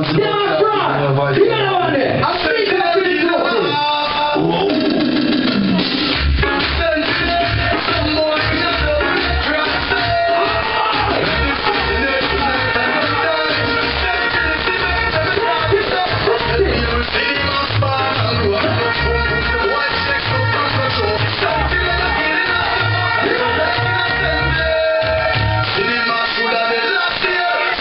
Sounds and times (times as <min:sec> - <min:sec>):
Speech: 0:00.0 - 0:04.9
Music: 0:01.3 - 0:27.8.